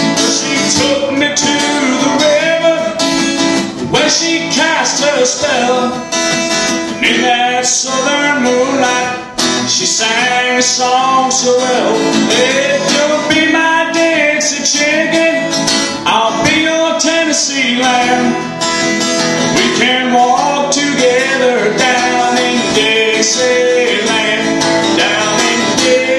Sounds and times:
Independent music: 0.0s - 26.1s.

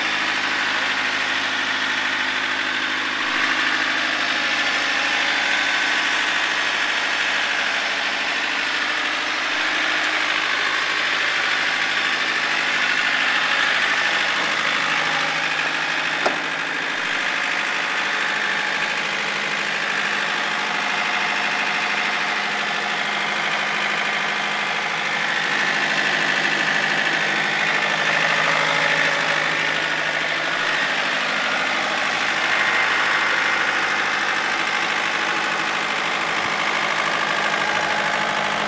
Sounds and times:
Vehicle: 0.0s - 38.6s.

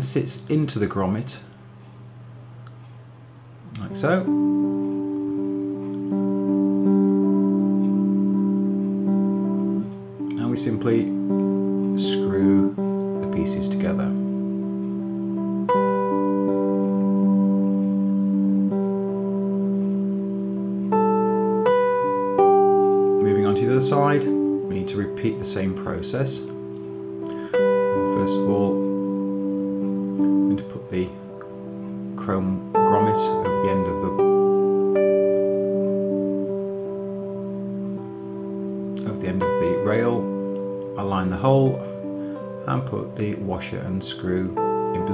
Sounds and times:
Speech: 0.0s - 1.5s, 3.8s - 4.3s, 10.4s - 11.1s, 12.0s - 14.2s, 23.2s - 26.5s, 28.0s - 28.8s, 30.5s - 31.2s, 32.2s - 34.2s, 39.0s - 40.3s, 41.0s - 41.9s, 42.7s - 45.1s
Inside, small room: 0.0s - 45.1s
Music: 0.0s - 45.1s.

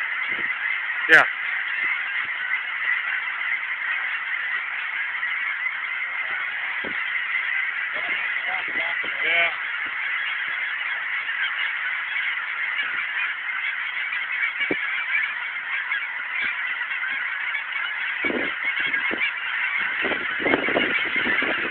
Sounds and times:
Honk: 0.0s - 21.7s.

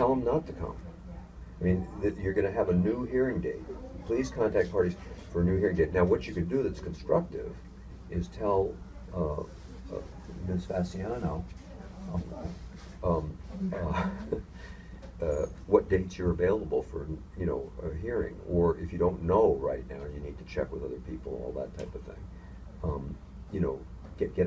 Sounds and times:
Speech: 0.0s - 14.4s, 15.2s - 22.2s, 22.8s - 24.4s.

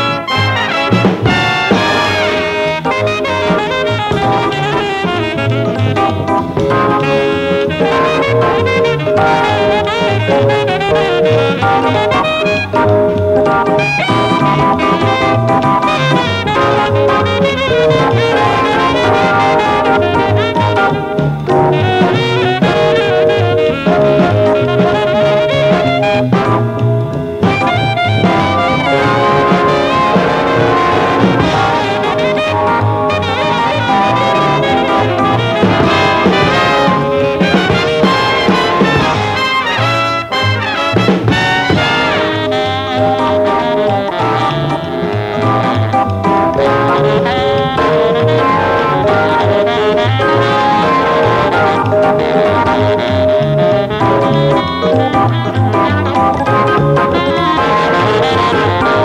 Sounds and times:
Brass instrument: 0.0s - 59.0s
Saxophone: 0.0s - 59.0s.

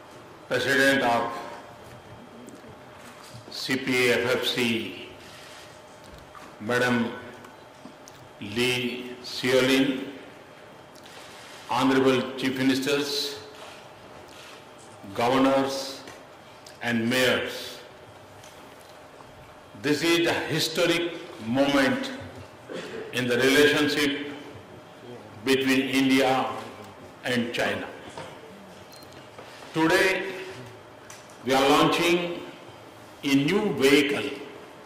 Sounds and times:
Narration, monologue: 0.0s - 34.8s
Male speech, man speaking: 0.5s - 1.6s, 3.5s - 5.1s, 6.6s - 7.2s, 8.4s - 10.1s, 11.7s - 13.5s, 15.1s - 16.1s, 16.8s - 17.9s, 19.8s - 22.2s, 23.2s - 24.4s, 25.1s - 28.0s, 29.8s - 30.6s, 31.5s - 32.5s, 33.2s - 34.5s.

